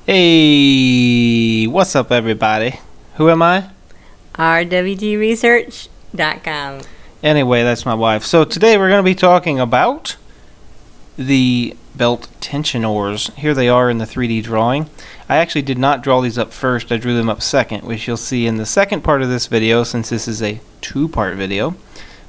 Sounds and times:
Speech: 0:00.1 - 0:03.7, 0:11.2 - 0:21.8.

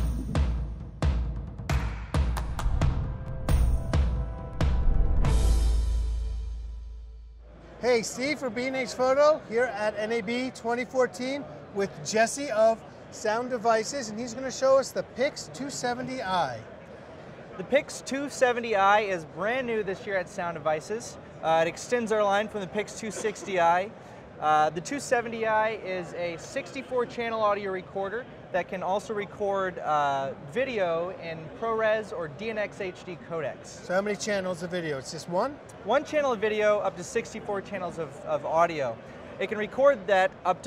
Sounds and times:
Speech: 0:07.8 - 0:16.7, 0:17.6 - 0:40.6.

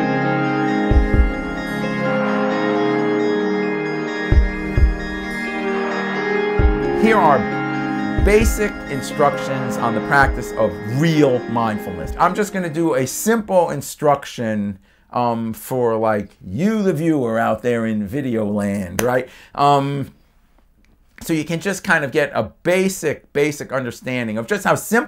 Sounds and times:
Speech: 0:07.0 - 0:07.5, 0:08.2 - 0:20.2, 0:21.2 - 0:25.0.

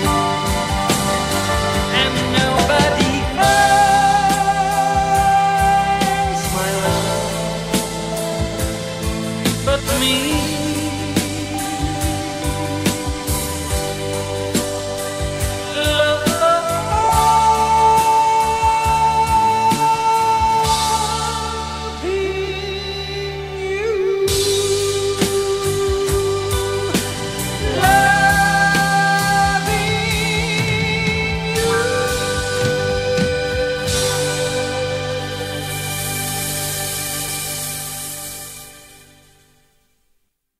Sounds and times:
Music: 0:00.0 - 0:40.5.

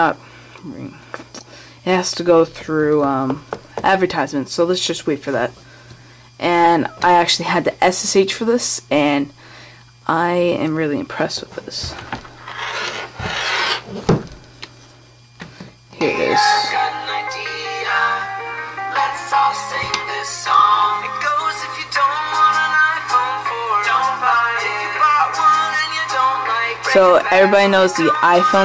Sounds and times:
Speech: 0:01.9 - 0:05.5, 0:06.4 - 0:09.3, 0:10.1 - 0:12.0, 0:26.9 - 0:28.6.

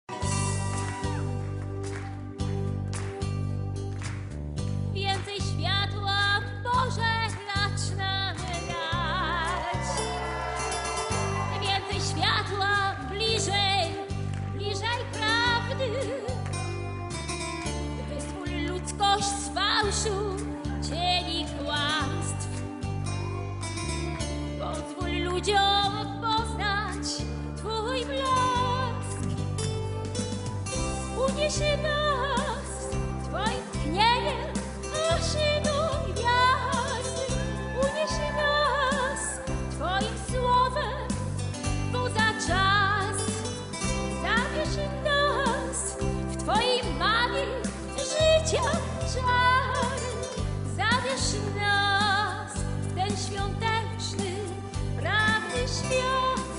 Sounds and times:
Music: 0:00.0 - 0:56.5.

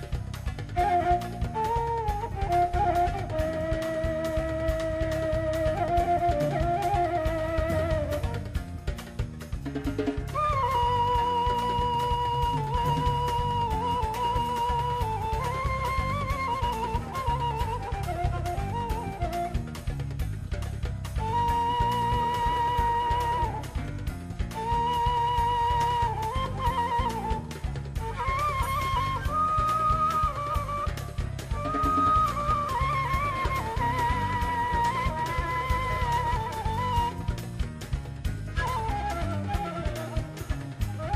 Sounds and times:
Flute: 0:00.0 - 0:41.1.

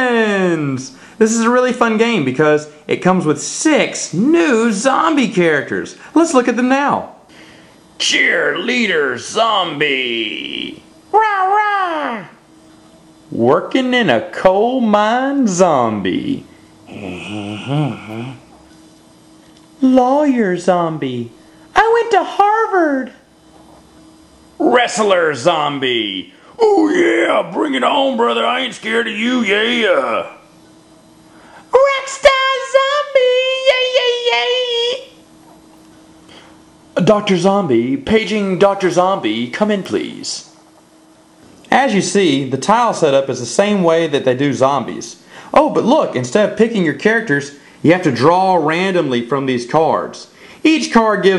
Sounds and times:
Speech: 0:00.0 - 0:07.2, 0:08.0 - 0:12.4, 0:13.3 - 0:18.4, 0:19.8 - 0:23.3, 0:24.6 - 0:30.5, 0:31.7 - 0:35.2, 0:37.0 - 0:40.6, 0:41.7 - 0:51.3
Inside, small room: 0:00.0 - 0:51.3.

